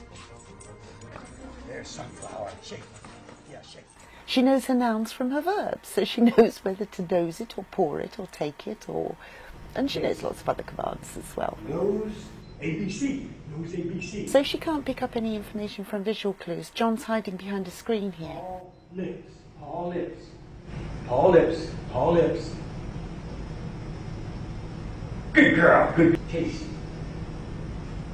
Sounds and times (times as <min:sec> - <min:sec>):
Speech: 0:09.8 - 0:20.3.